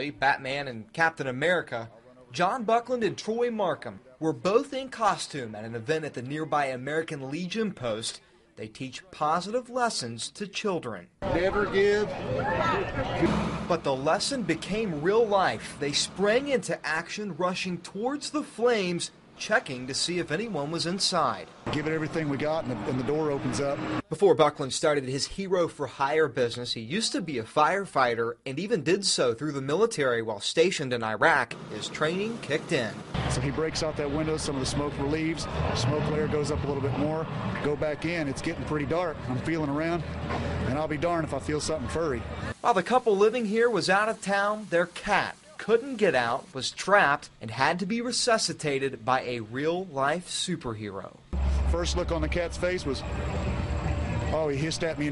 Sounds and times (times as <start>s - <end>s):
Speech: 0.0s - 40.0s, 40.7s - 53.0s, 54.3s - 55.1s.